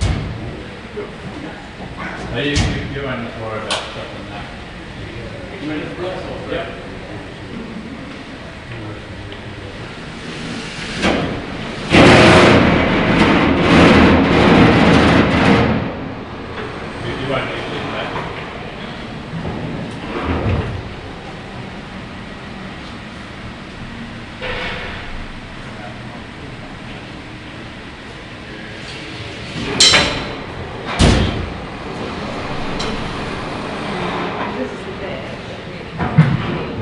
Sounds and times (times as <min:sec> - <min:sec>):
Heavy engine (low frequency): 0:00.0 - 0:36.8.